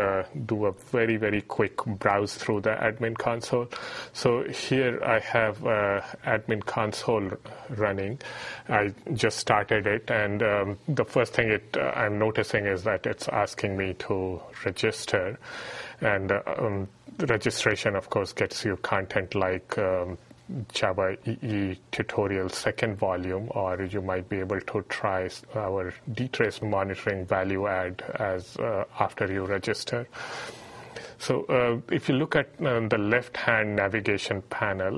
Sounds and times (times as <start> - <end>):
Speech: 0.0 - 15.4, 16.0 - 30.1, 31.2 - 34.9.